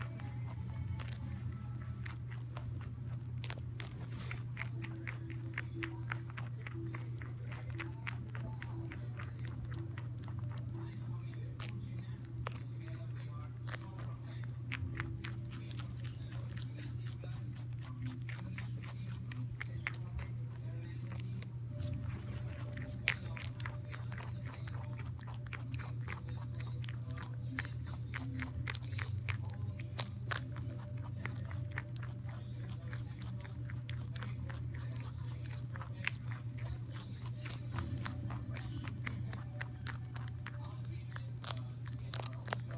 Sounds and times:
Inside, small room: 0.0s - 42.7s.

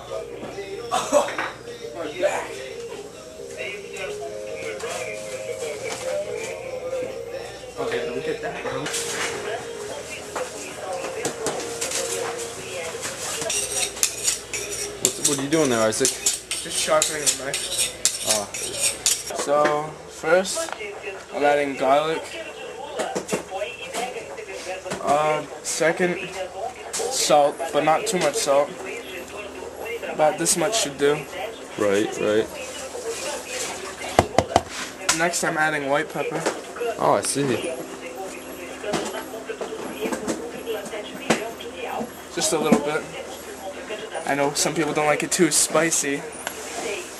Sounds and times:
Speech: 15.0s - 47.1s.

